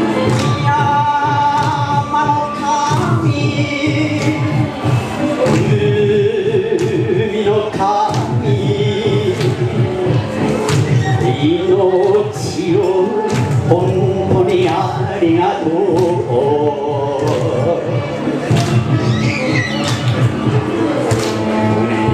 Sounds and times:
Male singing: 0:00.0 - 0:18.4
Music: 0:00.0 - 0:22.1.

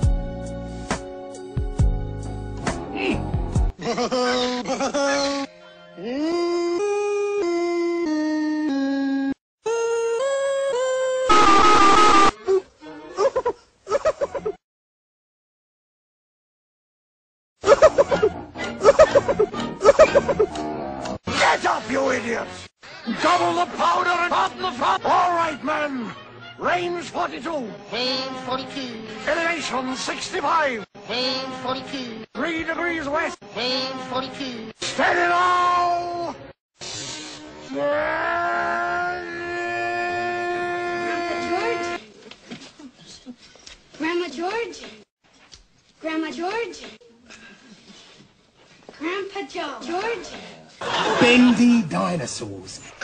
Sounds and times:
Wail, moan: 0:37.6 - 0:42.1.

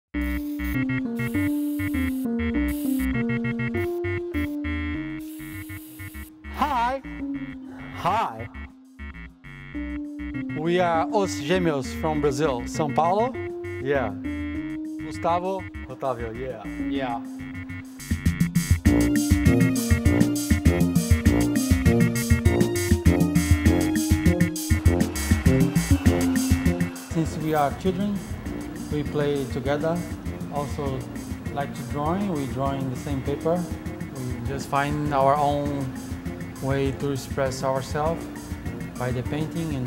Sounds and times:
Music: 0:00.1 - 0:39.8.

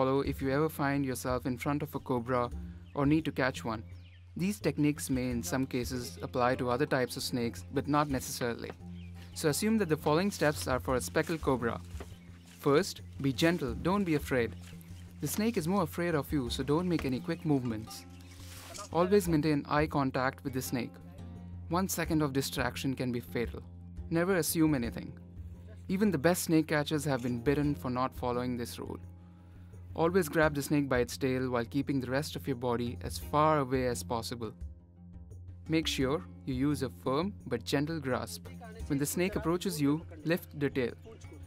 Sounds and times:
Speech: 0:00.0 - 0:03.8, 0:04.4 - 0:08.8, 0:09.4 - 0:11.8, 0:12.6 - 0:14.6, 0:15.2 - 0:18.0, 0:18.7 - 0:21.0, 0:21.7 - 0:25.1, 0:25.7 - 0:29.0, 0:30.0 - 0:34.6, 0:35.7 - 0:41.4
Music: 0:00.0 - 0:41.4.

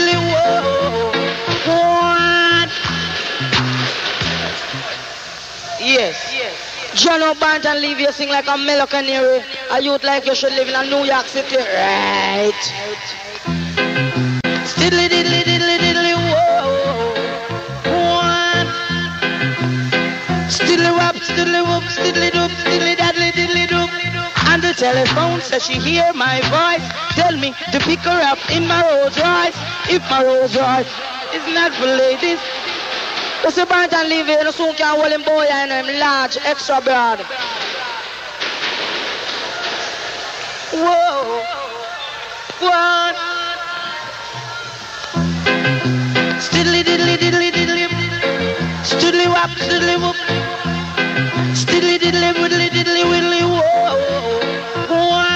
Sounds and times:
Music: 0:00.0 - 0:05.7, 0:11.2 - 0:33.5, 0:39.5 - 0:55.3.

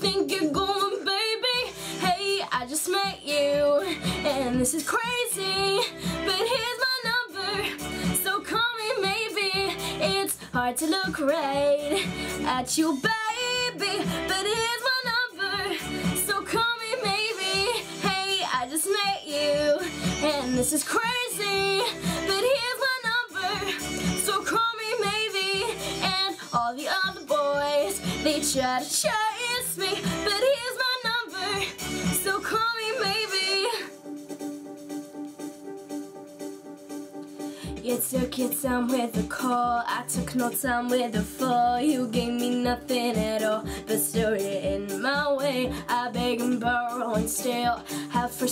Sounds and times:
Female singing: 0:00.0 - 0:33.9, 0:37.7 - 0:48.5
Music: 0:00.0 - 0:48.5.

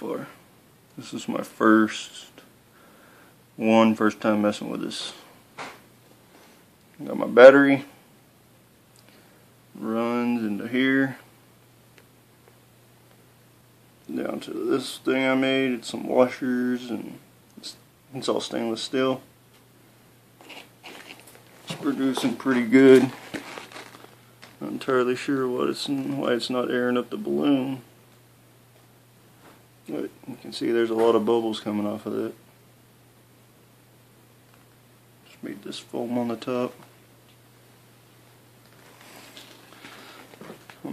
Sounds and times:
Speech: 0:00.0 - 0:00.4, 0:01.0 - 0:02.5, 0:03.6 - 0:05.3, 0:07.0 - 0:08.0, 0:09.8 - 0:11.3, 0:14.1 - 0:19.3, 0:21.7 - 0:23.2, 0:24.6 - 0:27.9, 0:29.9 - 0:32.4, 0:35.3 - 0:36.8.

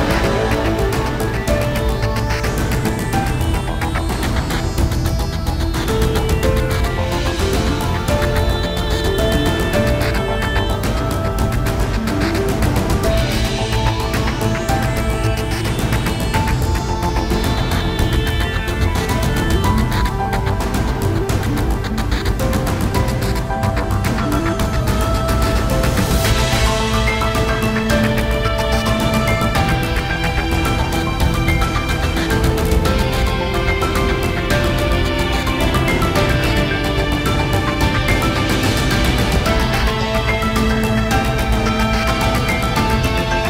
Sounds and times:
Music: 0:00.0 - 0:43.5.

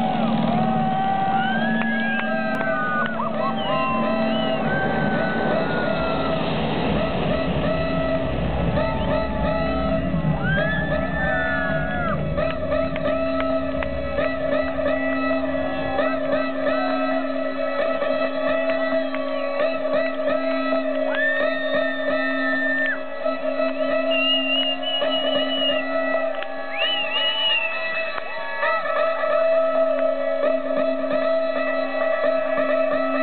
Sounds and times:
Music: 0:00.0 - 0:33.2.

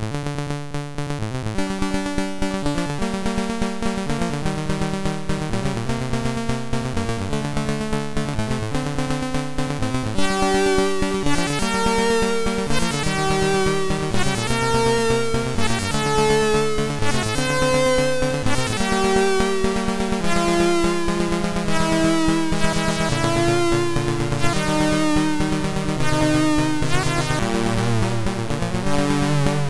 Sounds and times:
Music: 0:00.0 - 0:29.7.

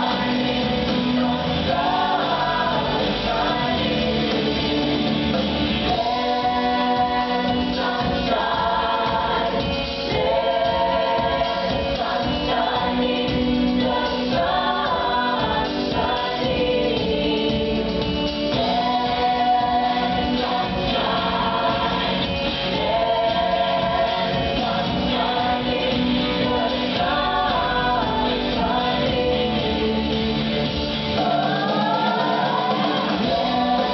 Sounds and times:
A capella: 0:00.0 - 0:33.9.

